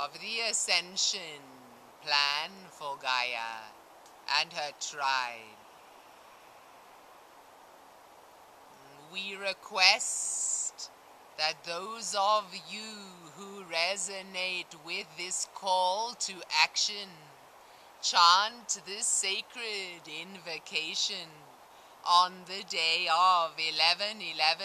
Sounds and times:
Speech: 0.0 - 5.6, 8.8 - 17.3, 18.0 - 21.4, 22.1 - 24.6.

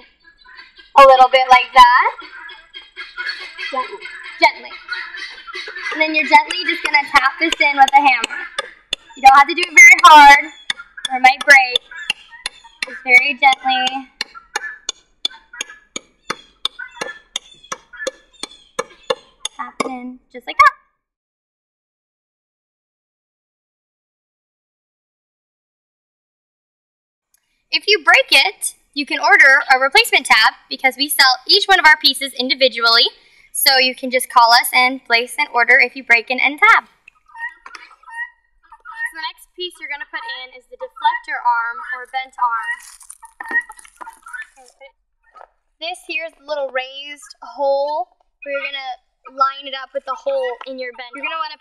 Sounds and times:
Animal: 0.0 - 20.8, 36.6 - 51.6
Speech: 1.0 - 2.2, 3.7 - 4.8, 5.9 - 8.4, 9.2 - 10.5, 11.1 - 11.8, 12.9 - 14.1, 19.6 - 20.7, 27.8 - 36.9, 39.0 - 42.9, 45.8 - 51.6.

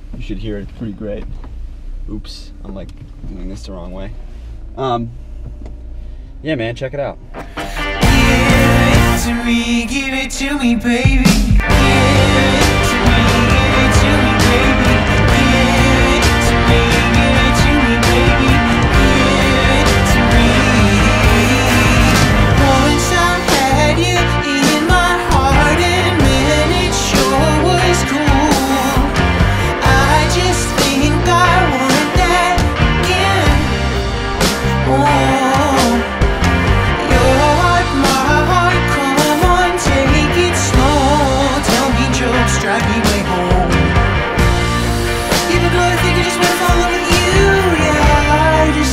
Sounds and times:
Music: 7.2 - 48.9.

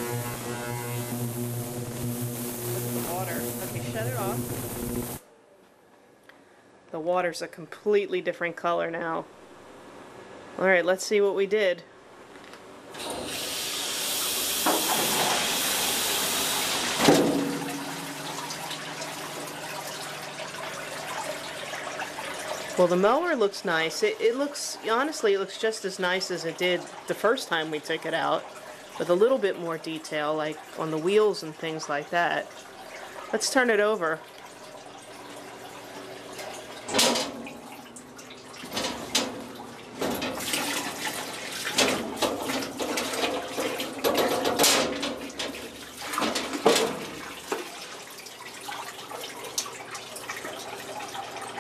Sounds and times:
Speech: 3.1 - 4.4, 6.9 - 9.3, 10.6 - 11.9, 22.8 - 32.5, 33.3 - 34.2.

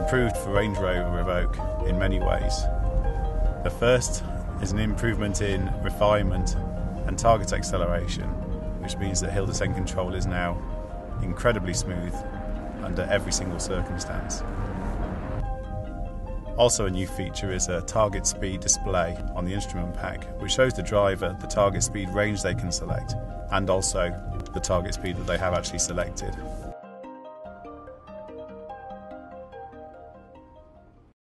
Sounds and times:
Speech: 0.0 - 2.7, 3.7 - 10.6, 11.2 - 12.2, 12.8 - 14.4, 16.6 - 26.4
Music: 0.0 - 31.2.

